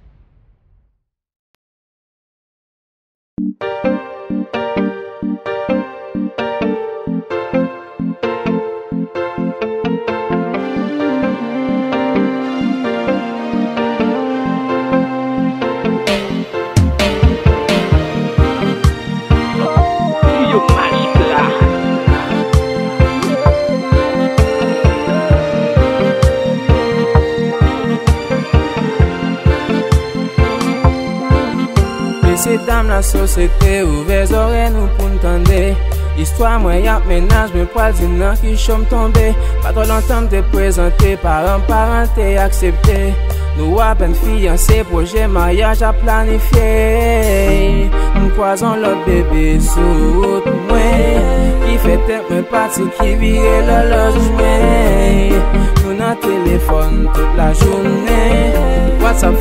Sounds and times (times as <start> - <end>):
Soul music: 3.4 - 59.4.